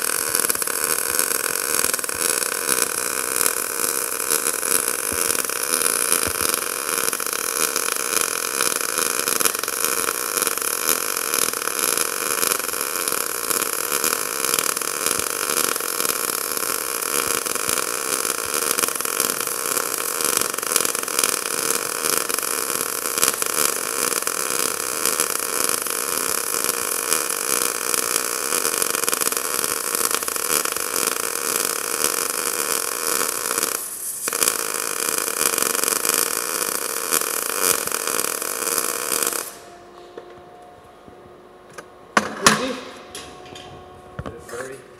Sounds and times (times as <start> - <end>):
Speech: 42.3 - 43.0, 44.2 - 44.9.